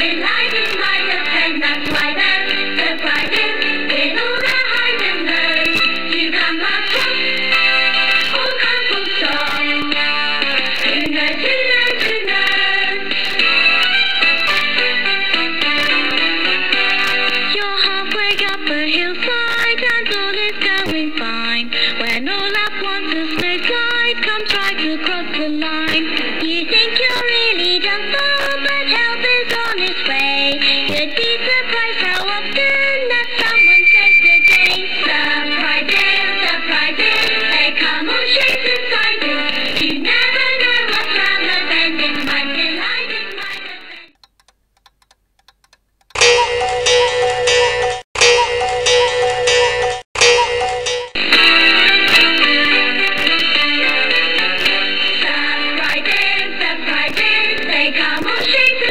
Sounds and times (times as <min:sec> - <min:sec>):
Music: 0:00.0 - 0:44.1, 0:46.2 - 0:58.9.